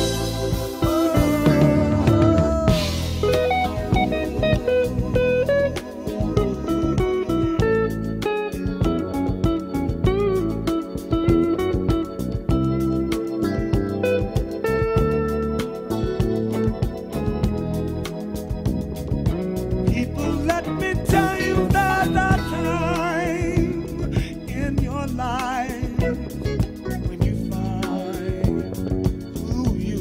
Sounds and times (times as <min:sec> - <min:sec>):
Singing: 0:00.0 - 0:03.4, 0:19.9 - 0:30.0
Funk: 0:00.0 - 0:30.0.